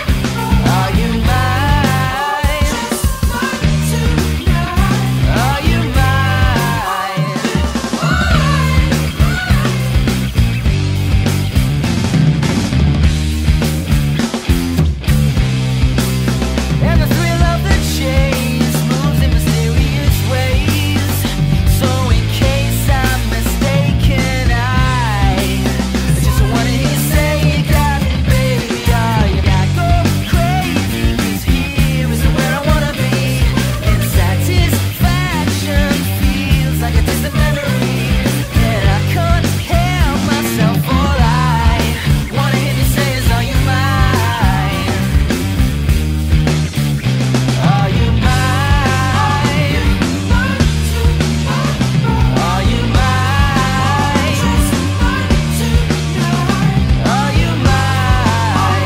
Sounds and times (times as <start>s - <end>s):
Blues: 0.0s - 58.8s
Jazz: 0.0s - 58.8s.